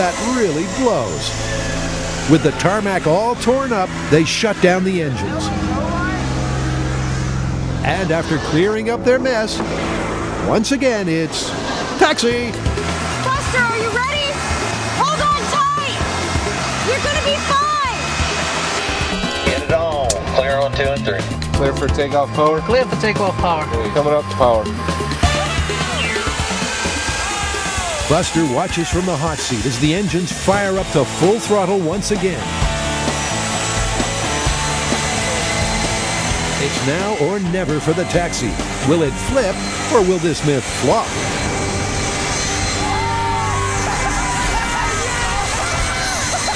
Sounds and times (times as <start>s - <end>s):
Jet engine: 0.0s - 46.5s.